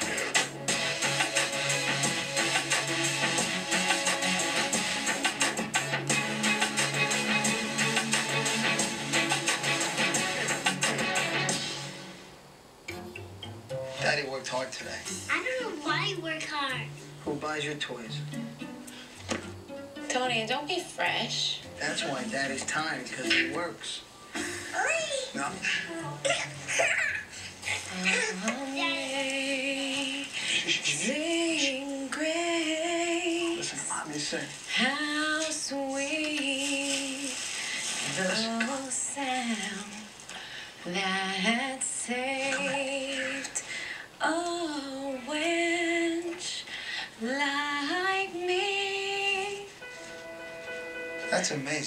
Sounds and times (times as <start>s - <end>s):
Singing: 27.9s - 40.2s, 40.8s - 43.6s.